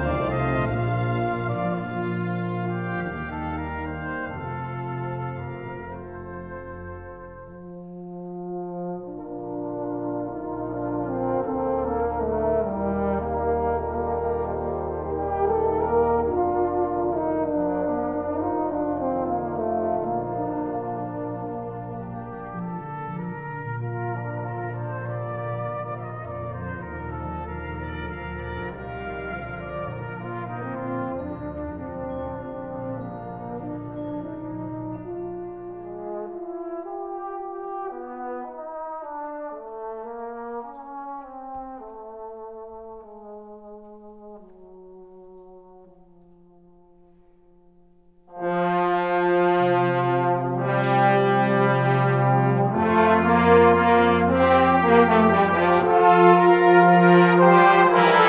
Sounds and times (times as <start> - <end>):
Classical music: 0.0 - 58.2
French horn: 0.0 - 58.2.